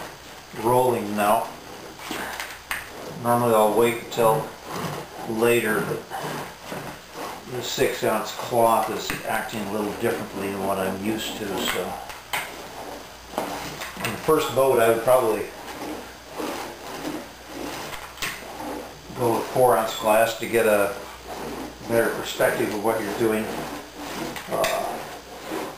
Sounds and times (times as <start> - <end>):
Speech: 0.6 - 1.6, 3.2 - 4.6, 5.3 - 6.1, 7.5 - 12.1, 14.0 - 15.6, 19.1 - 21.0, 21.8 - 23.7, 24.5 - 25.1.